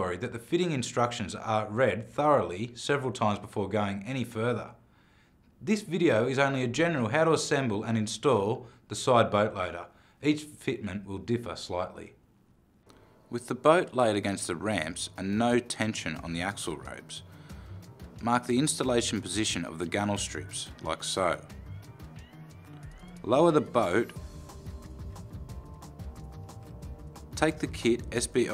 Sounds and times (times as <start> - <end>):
Speech: 0.0 - 4.8, 5.6 - 12.2, 13.3 - 17.2, 18.2 - 21.5, 23.2 - 24.2, 27.4 - 28.5
Music: 14.0 - 28.5.